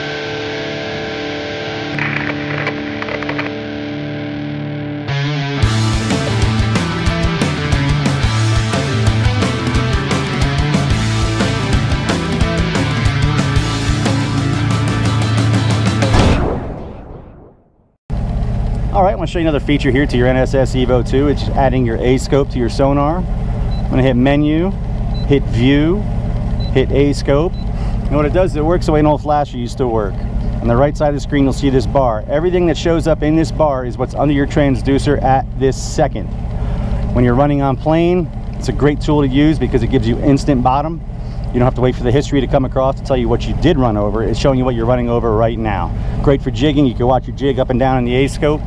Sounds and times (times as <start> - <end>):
Speech: 18.9 - 23.3, 23.9 - 26.0, 26.8 - 36.3, 37.1 - 41.0, 41.6 - 48.6.